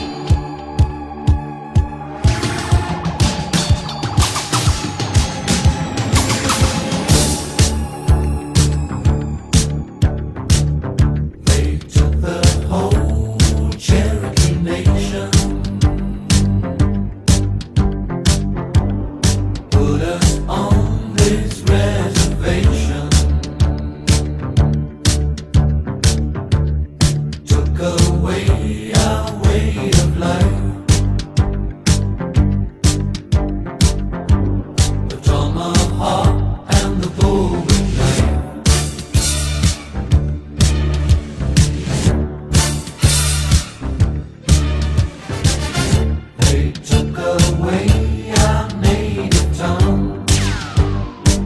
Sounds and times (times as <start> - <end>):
Music: 0.0 - 51.4.